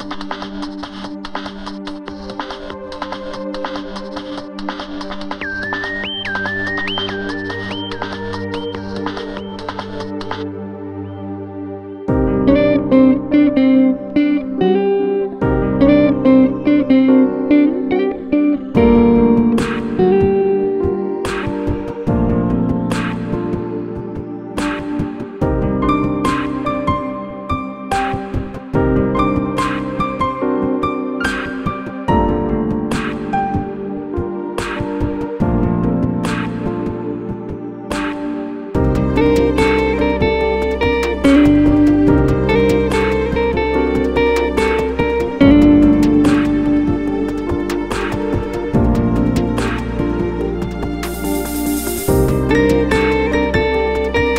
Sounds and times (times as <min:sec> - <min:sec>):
Jazz: 0:12.1 - 0:54.3.